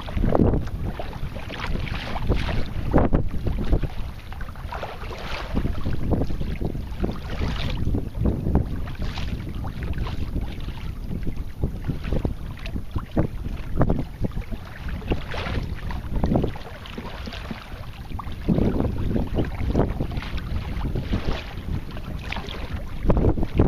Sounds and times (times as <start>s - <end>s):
Rowboat, canoe, kayak: 0.0s - 23.6s.